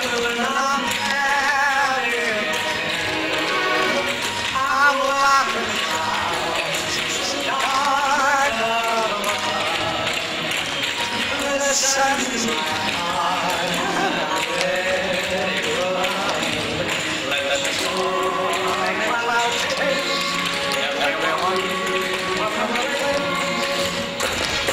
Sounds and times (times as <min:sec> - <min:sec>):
Music: 0:00.0 - 0:24.7.